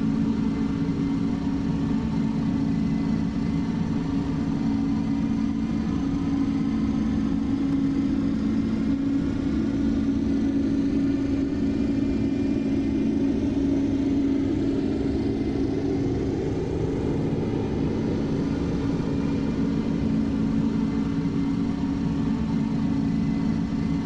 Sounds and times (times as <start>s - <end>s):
Fixed-wing aircraft, airplane: 0.0s - 24.0s.